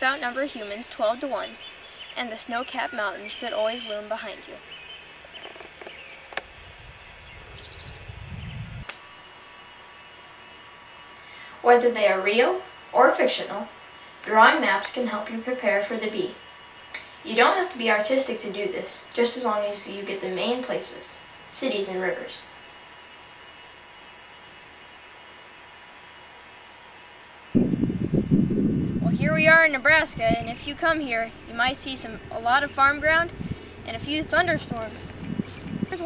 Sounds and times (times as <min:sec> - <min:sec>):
Speech: 0:00.0 - 0:01.6, 0:02.2 - 0:04.6, 0:11.6 - 0:16.4, 0:17.2 - 0:22.5, 0:29.0 - 0:35.0
Outside, rural or natural: 0:00.0 - 0:36.0.